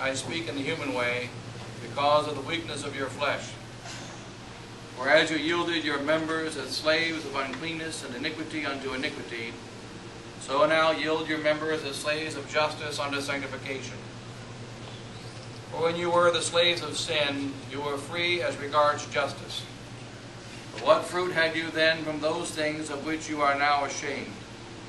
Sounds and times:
Speech: 0:00.0 - 0:03.6, 0:05.0 - 0:09.6, 0:10.4 - 0:14.1, 0:15.7 - 0:19.8, 0:20.8 - 0:24.4.

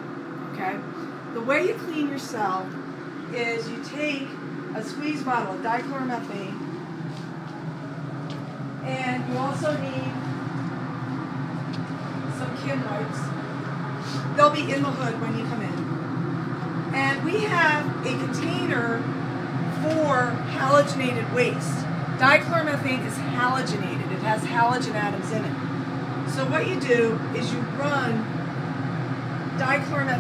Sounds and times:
Speech: 0:00.6 - 0:00.8, 0:01.4 - 0:02.7, 0:03.3 - 0:06.6, 0:08.9 - 0:10.2, 0:12.4 - 0:13.3, 0:14.4 - 0:15.9, 0:17.0 - 0:19.0, 0:19.8 - 0:25.6, 0:26.3 - 0:28.3, 0:29.6 - 0:30.2.

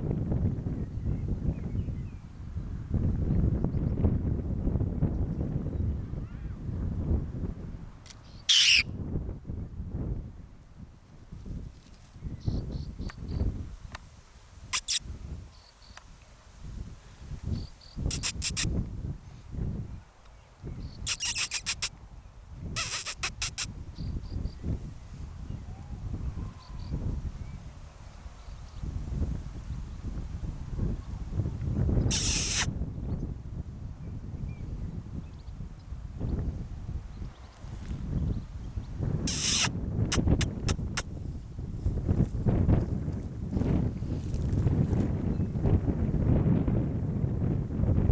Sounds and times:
Outside, rural or natural: 0:00.0 - 0:48.1
Animal: 0:08.5 - 0:08.8, 0:14.7 - 0:15.0, 0:18.1 - 0:18.7, 0:21.1 - 0:21.9, 0:22.8 - 0:23.7, 0:32.1 - 0:32.7, 0:39.3 - 0:41.1.

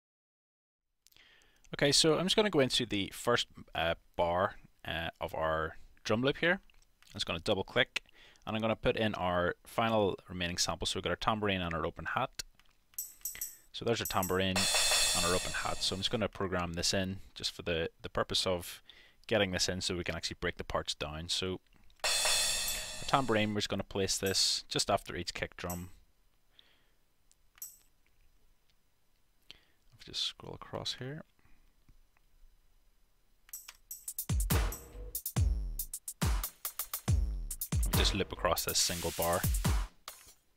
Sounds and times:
Speech: 0:01.7 - 0:12.5, 0:13.8 - 0:21.6, 0:23.1 - 0:26.0, 0:30.0 - 0:31.3, 0:37.9 - 0:39.5
Music: 0:13.0 - 0:16.1, 0:22.0 - 0:23.5, 0:33.5 - 0:40.4.

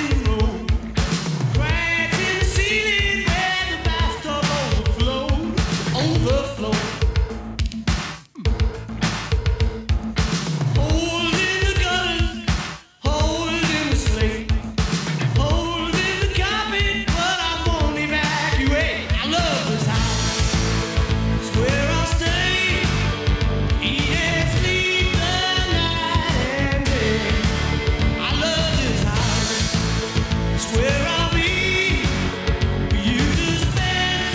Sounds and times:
Music: 0:00.0 - 0:34.3.

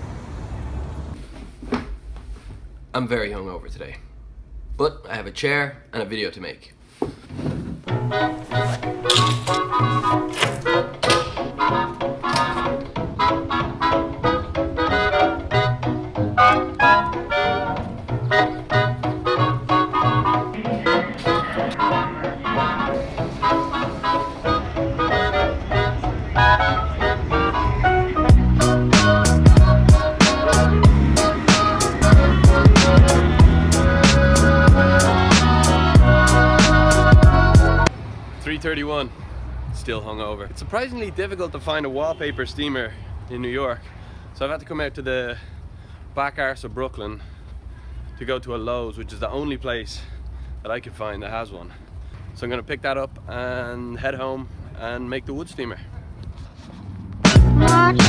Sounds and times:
Music: 0:07.9 - 0:37.9, 0:57.2 - 0:58.0.

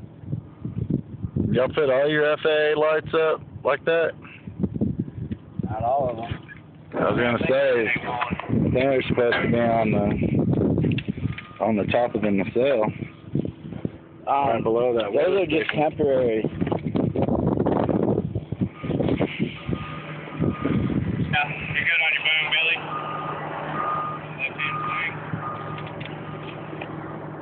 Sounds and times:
Speech: 0:01.5 - 0:04.2, 0:05.7 - 0:06.4, 0:07.0 - 0:10.2, 0:11.6 - 0:13.0, 0:14.3 - 0:16.5, 0:21.4 - 0:22.8.

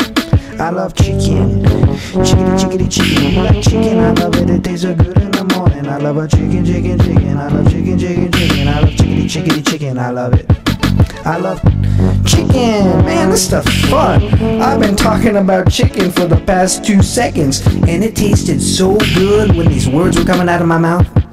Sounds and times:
Theme music: 0:01.0 - 0:05.0, 0:10.6 - 0:20.6.

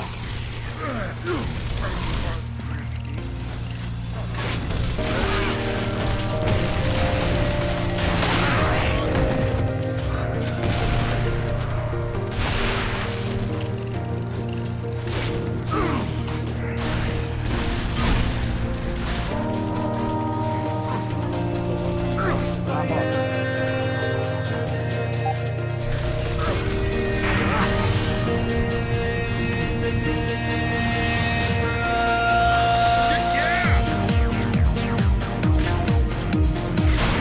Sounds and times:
Music: 0:00.0 - 0:37.2.

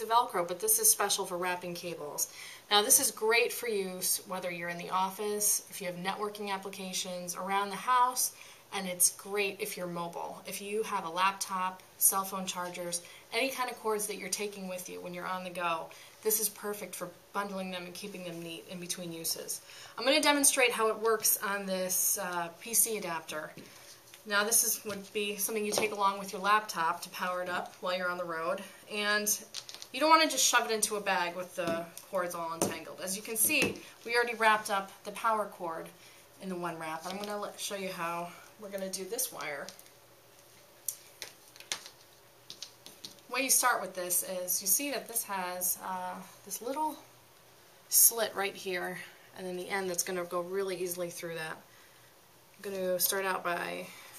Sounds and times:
Speech: 0:00.0 - 0:23.6, 0:24.3 - 0:39.8, 0:43.3 - 0:47.1, 0:47.9 - 0:51.6, 0:52.6 - 0:53.9.

